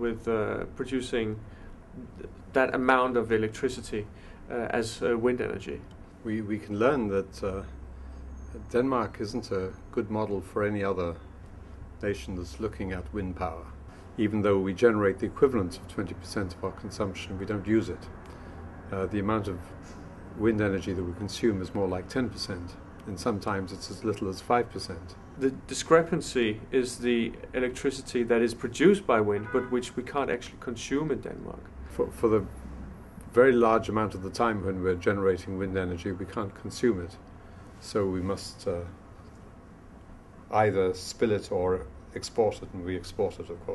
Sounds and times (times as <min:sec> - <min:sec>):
Speech: 0:00.0 - 0:07.8, 0:08.5 - 0:11.2, 0:12.0 - 0:18.1, 0:18.9 - 0:19.8, 0:20.4 - 0:32.5, 0:33.3 - 0:37.2, 0:37.8 - 0:39.0, 0:40.5 - 0:43.7.